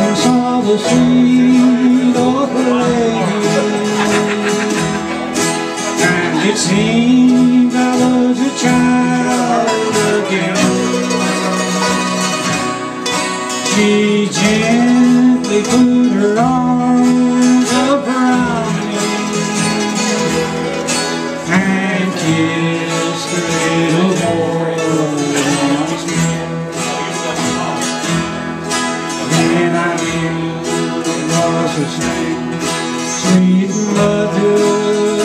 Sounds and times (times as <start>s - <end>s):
Singing: 0.0s - 4.8s, 6.0s - 12.0s, 13.7s - 27.3s, 29.2s - 35.2s
Bluegrass: 0.0s - 35.2s
Bowed string instrument: 0.0s - 35.2s
Guitar: 0.0s - 35.2s.